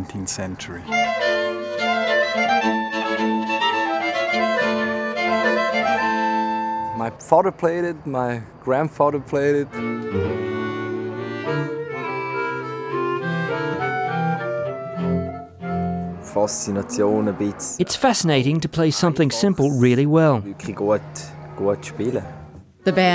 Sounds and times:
Speech: 0:00.0 - 0:00.9, 0:06.9 - 0:09.7, 0:16.3 - 0:22.3
Music: 0:00.8 - 0:07.1, 0:09.7 - 0:17.9, 0:19.8 - 0:23.1.

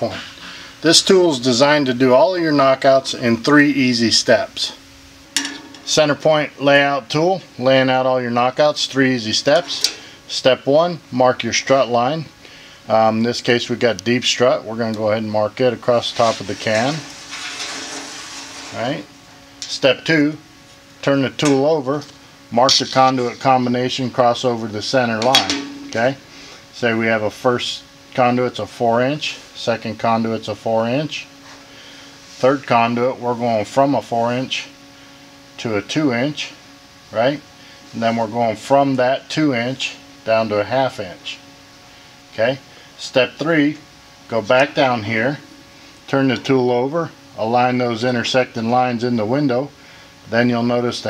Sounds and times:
Speech: 0:00.0 - 0:04.8, 0:05.9 - 0:12.3, 0:12.9 - 0:17.1, 0:18.7 - 0:20.4, 0:21.0 - 0:26.2, 0:26.8 - 0:31.3, 0:32.4 - 0:34.8, 0:35.6 - 0:41.5, 0:42.3 - 0:45.5, 0:46.1 - 0:51.1.

